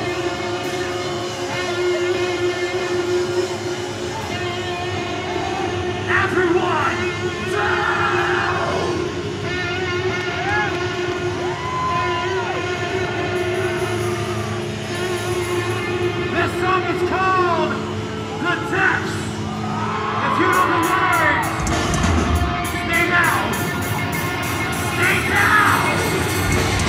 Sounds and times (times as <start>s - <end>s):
Music: 0.0s - 26.8s.